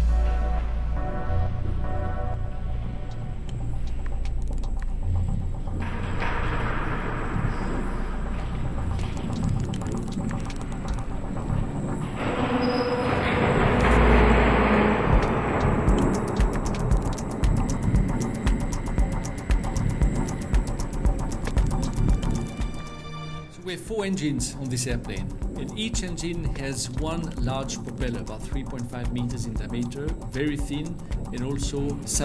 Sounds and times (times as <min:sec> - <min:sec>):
Music: 0:00.0 - 0:32.2
Speech: 0:23.6 - 0:32.2.